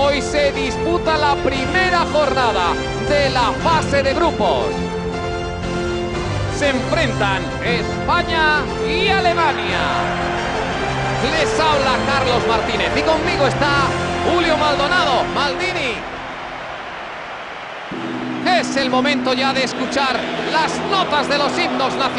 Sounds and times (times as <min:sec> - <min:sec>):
Speech: 0:00.0 - 0:04.7, 0:06.6 - 0:10.0, 0:11.2 - 0:16.0, 0:18.4 - 0:22.1
Music: 0:00.0 - 0:22.1.